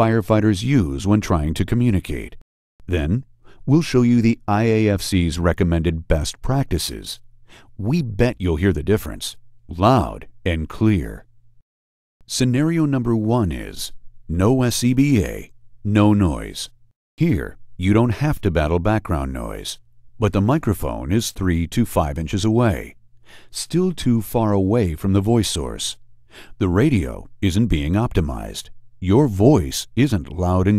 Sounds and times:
Speech: 0:00.0 - 0:07.2, 0:07.8 - 0:11.3, 0:12.3 - 0:26.0, 0:26.6 - 0:30.7.

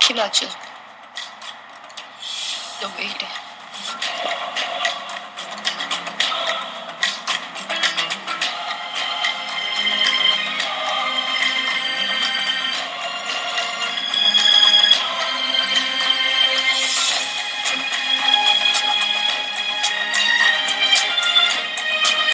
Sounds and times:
Music: 0:00.0 - 0:22.3.

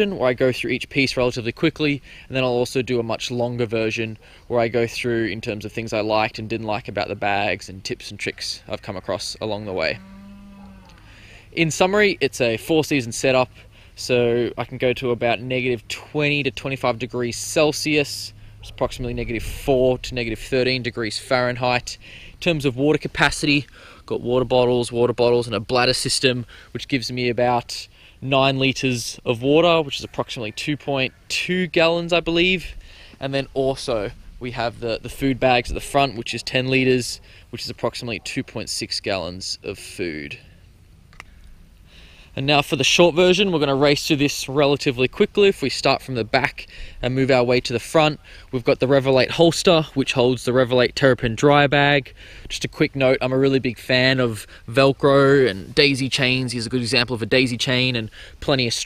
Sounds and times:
Speech: 0:00.0 - 0:10.0, 0:11.5 - 0:40.5, 0:42.4 - 0:58.8.

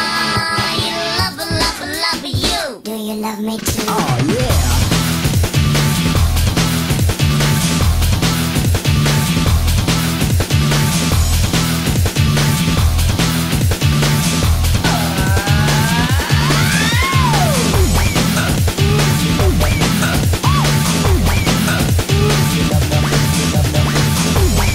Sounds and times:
Music: 0:00.0 - 0:24.7.

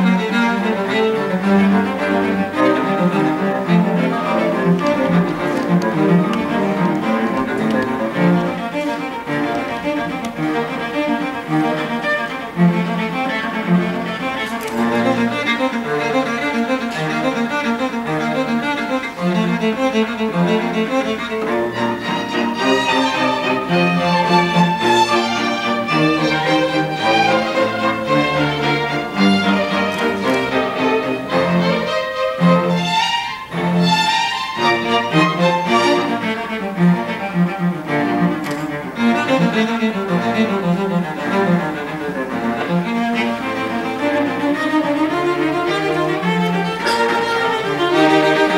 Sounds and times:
Cello: 0:00.0 - 0:48.5
Orchestra: 0:00.0 - 0:48.5
Violin, fiddle: 0:00.0 - 0:48.5.

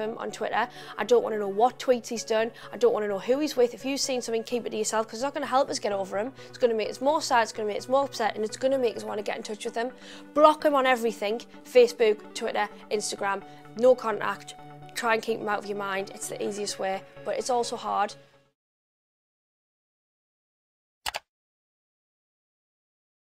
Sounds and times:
Speech: 0:00.0 - 0:18.2
Music: 0:00.0 - 0:18.6.

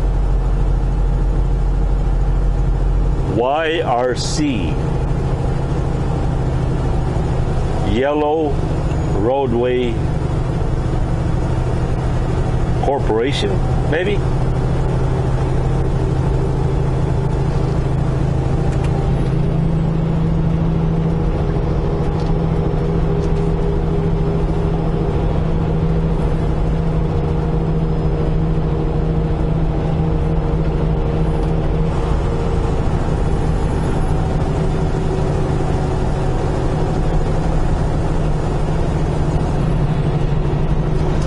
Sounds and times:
Truck: 0:00.0 - 0:41.2.

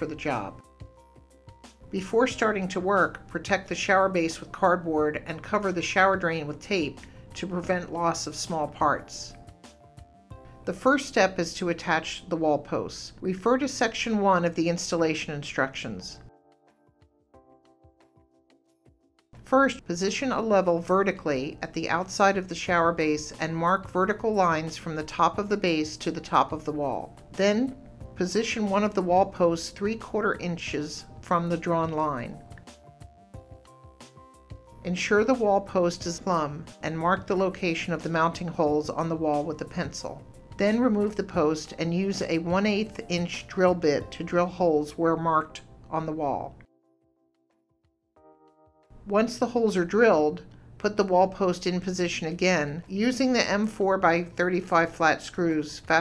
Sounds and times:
Speech: 0:00.0 - 0:00.6, 0:02.0 - 0:09.4, 0:10.7 - 0:16.3, 0:19.5 - 0:32.4, 0:34.8 - 0:46.6, 0:49.1 - 0:56.0
Music: 0:00.0 - 0:56.0.

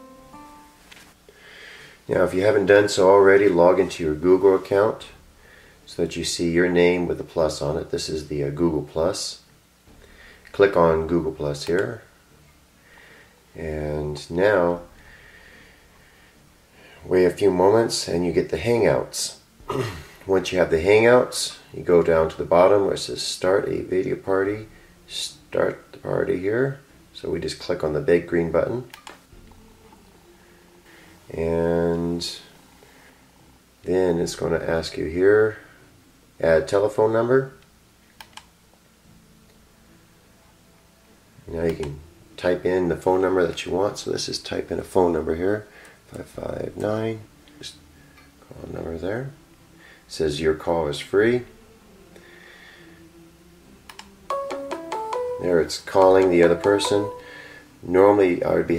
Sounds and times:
Speech: 0:02.1 - 0:05.2, 0:05.9 - 0:09.5, 0:10.5 - 0:12.1, 0:13.5 - 0:14.9, 0:17.0 - 0:19.4, 0:20.2 - 0:28.9, 0:31.3 - 0:32.6, 0:33.8 - 0:35.8, 0:36.4 - 0:37.6, 0:41.4 - 0:47.8, 0:48.4 - 0:49.4, 0:50.1 - 0:51.5, 0:55.4 - 0:57.2, 0:57.8 - 0:58.7.

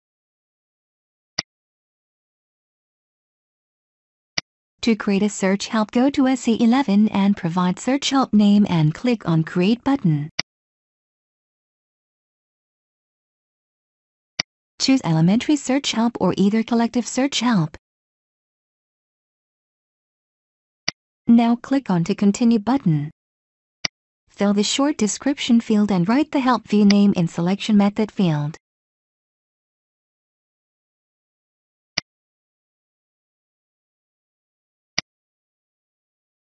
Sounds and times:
Speech: 0:04.8 - 0:10.3, 0:14.8 - 0:17.8, 0:21.3 - 0:23.2, 0:24.4 - 0:28.6.

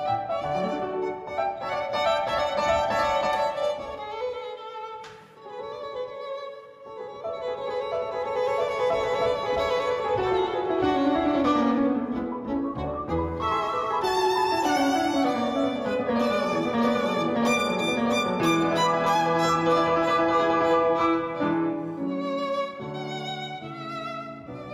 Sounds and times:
Violin, fiddle: 0:00.0 - 0:24.7.

